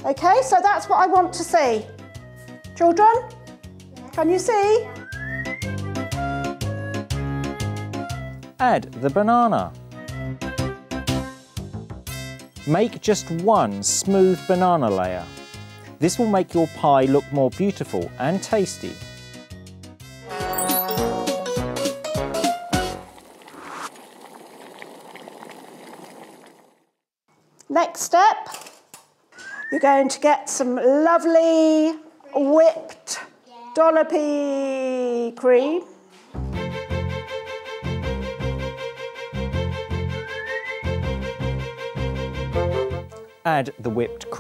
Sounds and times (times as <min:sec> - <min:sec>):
Music: 0:00.0 - 0:23.1, 0:36.4 - 0:44.4.